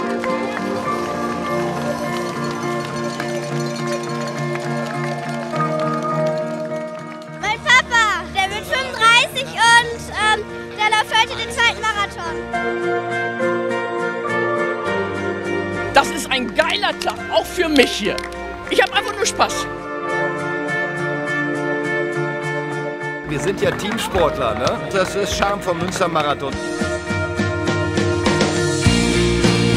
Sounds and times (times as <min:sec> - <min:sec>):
Music: 0:00.0 - 0:29.7
Outside, urban or manmade: 0:00.0 - 0:29.7.